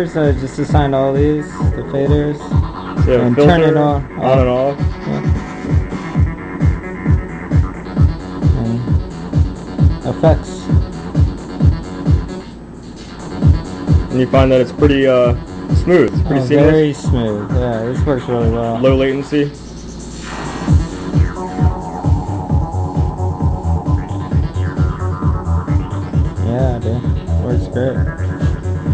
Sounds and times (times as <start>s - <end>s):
Speech: 0.0s - 2.4s, 3.0s - 5.3s, 10.0s - 10.6s, 14.1s - 19.6s, 26.4s - 28.1s
Inside, small room: 0.0s - 28.9s
Music: 0.0s - 28.9s.